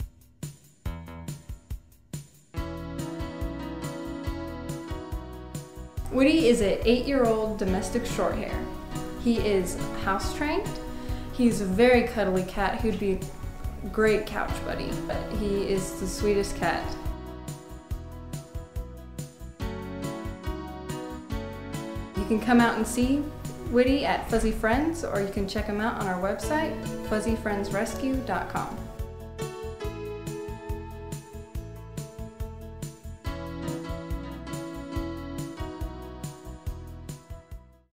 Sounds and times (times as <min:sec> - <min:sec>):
Music: 0:00.0 - 0:37.9
Speech: 0:06.1 - 0:10.8, 0:11.4 - 0:17.1, 0:22.2 - 0:28.9.